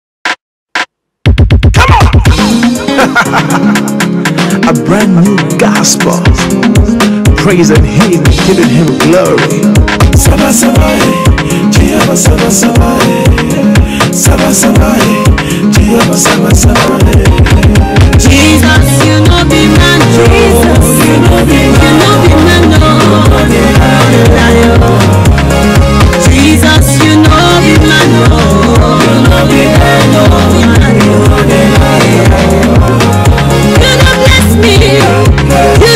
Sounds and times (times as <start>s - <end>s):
Drum machine: 0.2s - 35.9s
Speech: 4.6s - 6.4s, 7.4s - 9.5s.